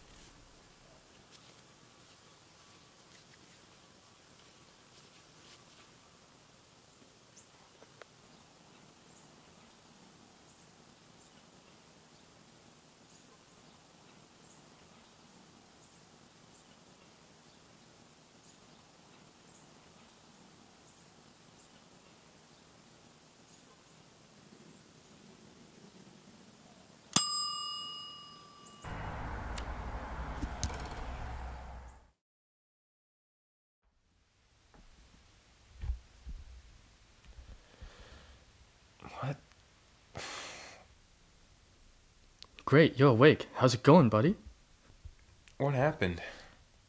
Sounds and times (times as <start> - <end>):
Outside, rural or natural: 0.0 - 32.2, 33.9 - 46.8.